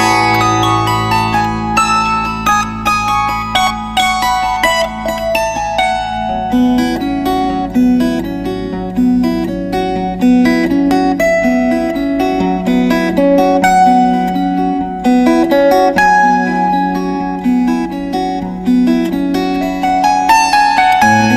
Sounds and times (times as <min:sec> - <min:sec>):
Strum: 0:00.0 - 0:09.6, 0:17.7 - 0:21.3
Acoustic guitar: 0:00.0 - 0:21.3.